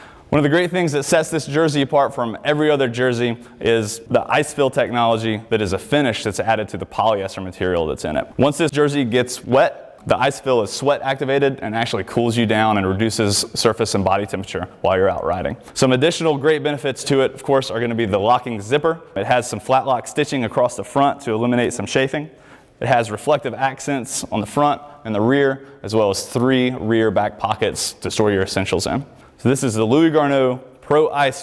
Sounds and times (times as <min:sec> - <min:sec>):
Speech: 0:00.3 - 0:31.4.